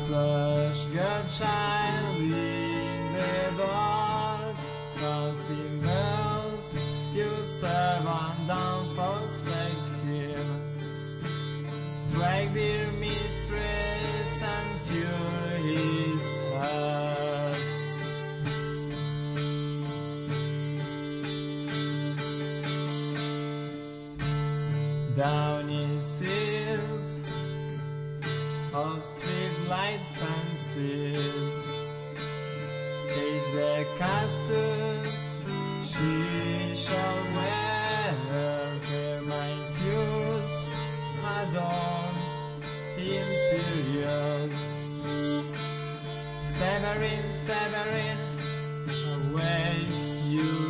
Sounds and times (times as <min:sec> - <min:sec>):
Guitar: 0:00.0 - 0:50.6
Violin, fiddle: 0:00.0 - 0:50.6.